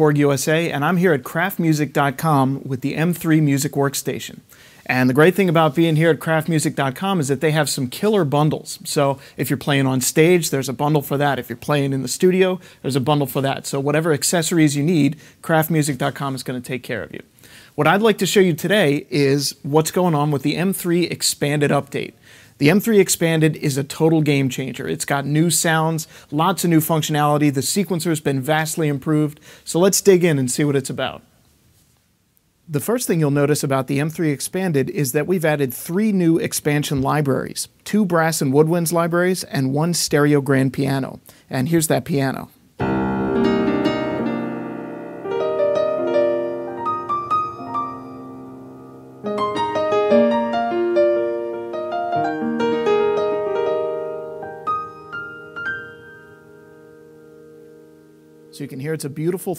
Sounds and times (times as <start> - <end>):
Speech: 0.0 - 31.3, 32.7 - 42.6, 58.5 - 59.5.